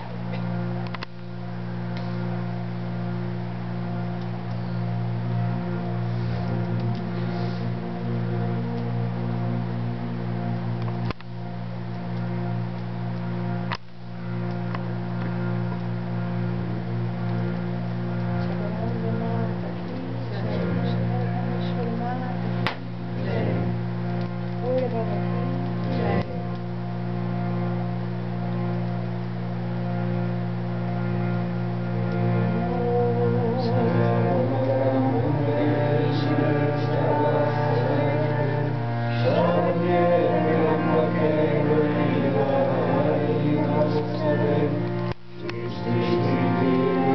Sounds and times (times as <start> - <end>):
Music: 0.0 - 47.1.